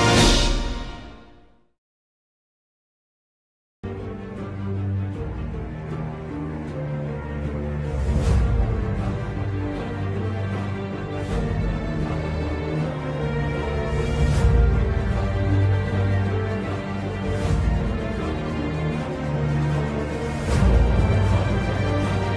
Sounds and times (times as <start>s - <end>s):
Music: 0.0s - 1.8s, 3.8s - 22.3s.